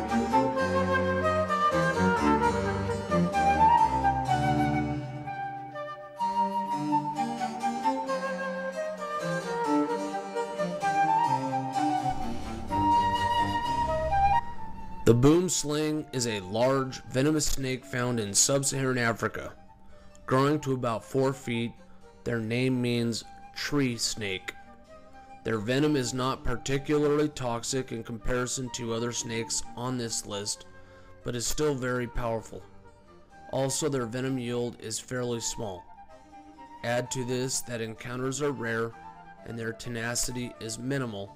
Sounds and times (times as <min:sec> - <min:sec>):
Music: 0:00.0 - 0:41.3
Speech: 0:15.1 - 0:19.6, 0:20.3 - 0:21.7, 0:22.3 - 0:24.6, 0:25.5 - 0:30.6, 0:31.3 - 0:32.6, 0:33.5 - 0:35.8, 0:36.8 - 0:41.3.